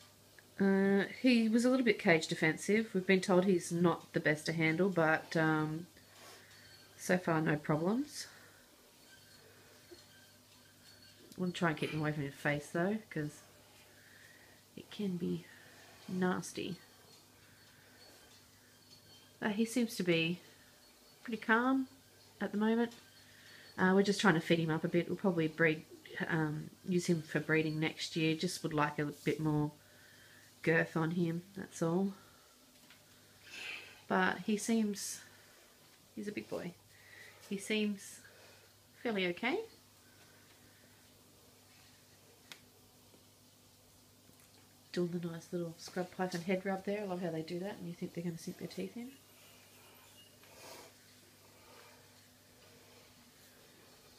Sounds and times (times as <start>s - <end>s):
Inside, small room: 0.0s - 54.1s
Speech: 0.6s - 5.9s, 7.0s - 8.4s, 11.4s - 13.4s, 21.3s - 22.9s, 23.8s - 29.8s, 30.6s - 32.2s, 34.1s - 35.2s, 36.2s - 36.8s, 39.0s - 39.7s, 44.9s - 49.2s.